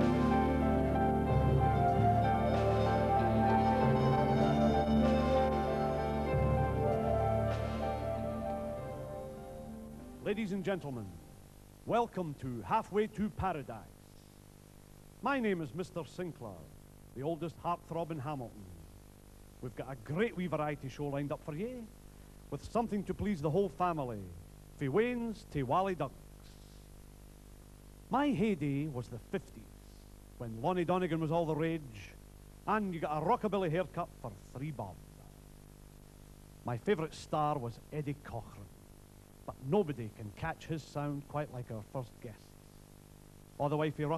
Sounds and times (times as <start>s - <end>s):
Speech: 10.2s - 11.2s, 11.9s - 14.0s, 15.2s - 18.9s, 19.6s - 26.2s, 28.1s - 29.8s, 30.4s - 35.0s, 36.6s - 38.8s, 39.5s - 42.6s, 43.6s - 44.1s.